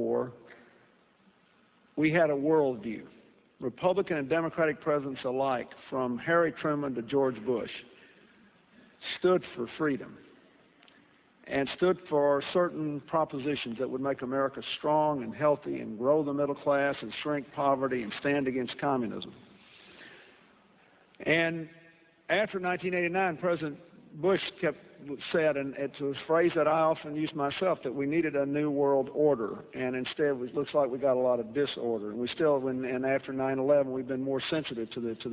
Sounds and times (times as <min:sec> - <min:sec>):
Male speech, man speaking: 0:00.0 - 0:00.4, 0:02.0 - 0:07.9, 0:09.0 - 0:10.2, 0:11.5 - 0:19.4, 0:21.2 - 0:35.3
Narration, monologue: 0:00.0 - 0:35.3.